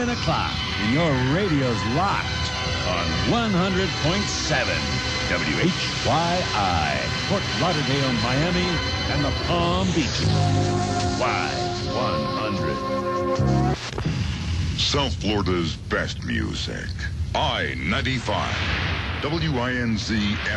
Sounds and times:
Speech: 0.0 - 12.9, 14.8 - 20.5
Music: 0.0 - 14.1.

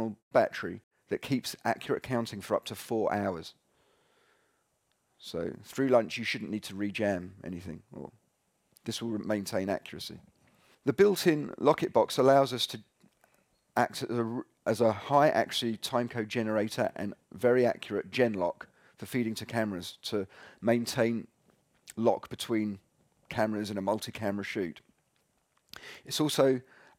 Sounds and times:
Speech: 0.0 - 3.6, 5.2 - 8.2, 8.8 - 10.2, 10.8 - 12.9, 13.8 - 21.3, 21.9 - 24.8, 26.0 - 26.7.

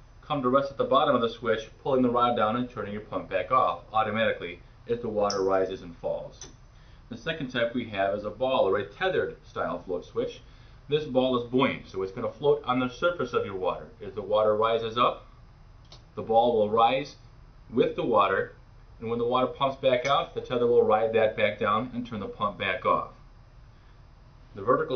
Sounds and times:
Speech: 0.3 - 6.5, 7.1 - 15.2, 16.2 - 23.2, 24.6 - 24.9.

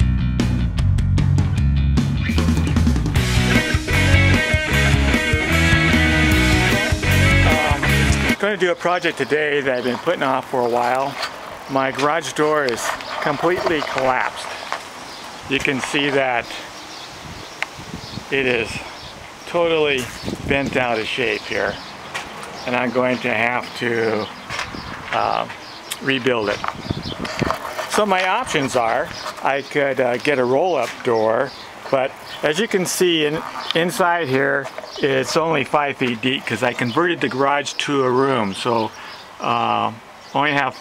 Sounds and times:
Speech: 7.4 - 14.6, 15.5 - 16.7, 18.3 - 18.9, 19.5 - 21.8, 22.6 - 24.3, 25.1 - 26.7, 27.9 - 40.8.

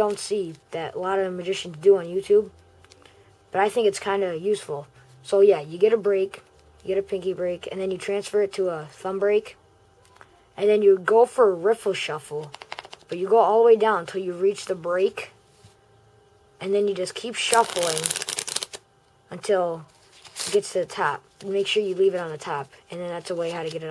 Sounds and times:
Speech: 3.6 - 12.5, 19.3 - 23.9
Shuffling cards: 12.4 - 13.2, 17.4 - 18.8, 20.0 - 20.8.

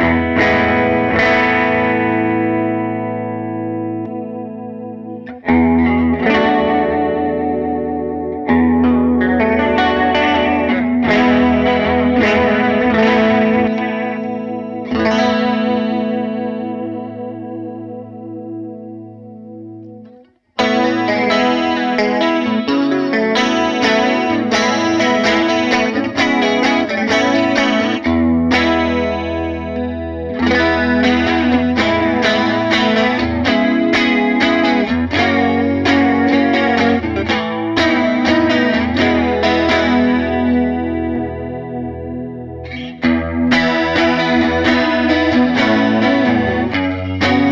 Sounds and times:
Music: 0.0 - 47.5.

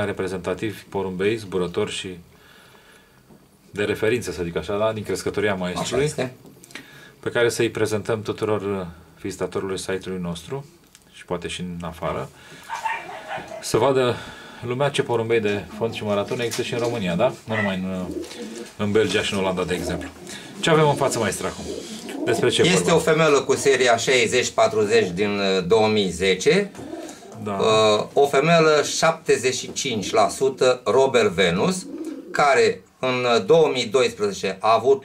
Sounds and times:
Coo: 18.1 - 18.7, 19.8 - 22.8, 31.7 - 32.4.

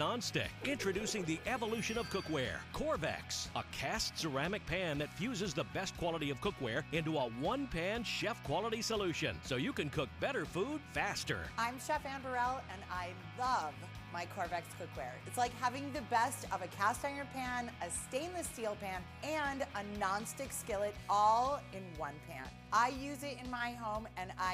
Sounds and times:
Music: 0.0 - 24.5
Speech: 0.0 - 24.5.

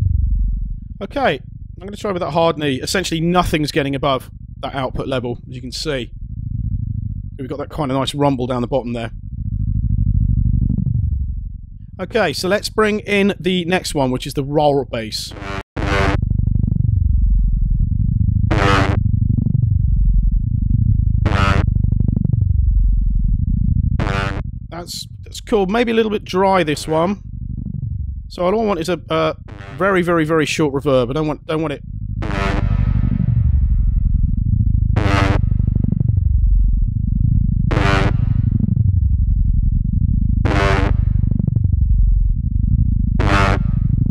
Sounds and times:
Speech: 1.0 - 6.1, 7.4 - 9.1, 12.0 - 15.4, 24.8 - 27.2, 28.3 - 31.8
Electronic music: 15.2 - 16.2, 18.5 - 19.0, 21.3 - 21.7, 24.0 - 27.2, 28.3 - 31.4, 32.2 - 33.7, 35.0 - 36.2, 37.7 - 38.6, 40.5 - 41.5, 43.2 - 44.1.

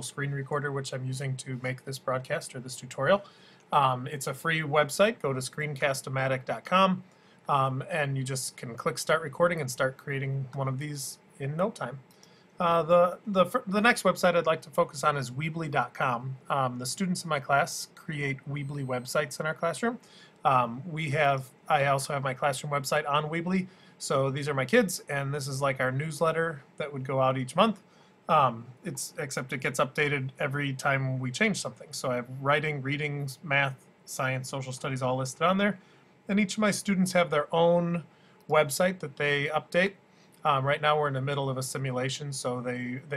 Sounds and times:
Speech: 0.0 - 43.1.

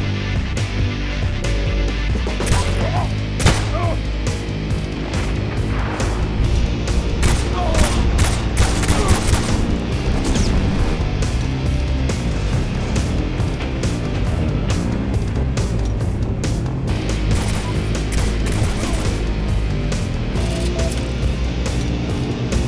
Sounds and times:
Music: 0.0 - 22.6
Fusillade: 7.2 - 10.6, 17.3 - 19.2.

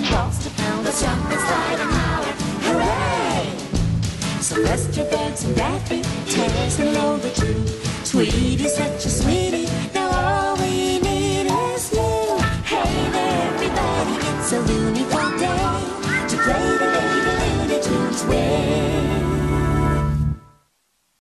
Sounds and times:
Music: 0.0 - 20.9.

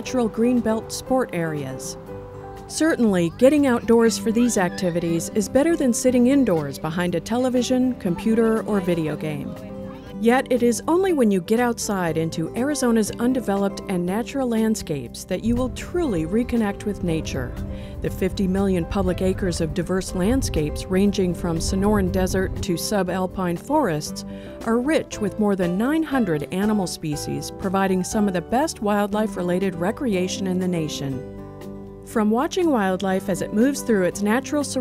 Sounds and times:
Speech: 0.0 - 2.0, 2.7 - 17.5, 18.1 - 31.2, 32.1 - 34.8
Music: 0.0 - 34.8.

